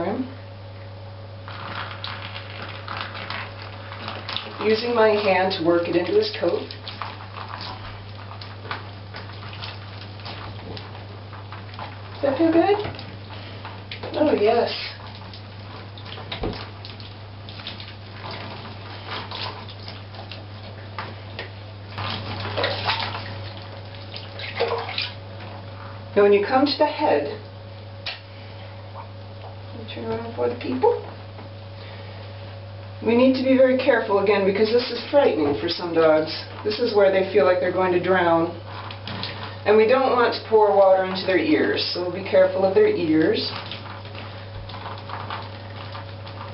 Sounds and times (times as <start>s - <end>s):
Speech: 0.0s - 0.4s, 4.6s - 6.8s, 12.2s - 12.9s, 14.0s - 15.0s, 26.2s - 27.4s, 29.7s - 31.1s, 33.0s - 38.6s, 39.6s - 43.6s
Bathtub (filling or washing): 1.4s - 46.5s.